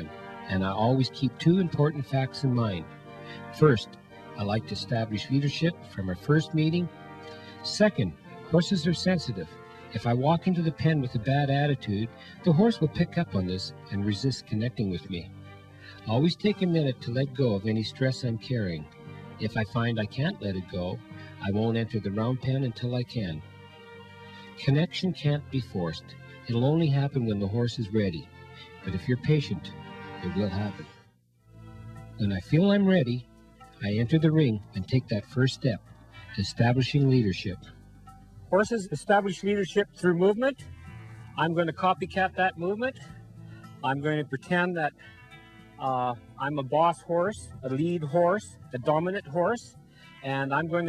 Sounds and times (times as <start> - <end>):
Speech: 0.0 - 6.9, 7.6 - 15.3, 16.0 - 23.4, 24.5 - 30.9, 32.2 - 33.2, 33.8 - 37.8, 38.5 - 40.6, 41.4 - 43.1, 43.8 - 45.0, 45.8 - 50.8
Music: 0.0 - 50.8.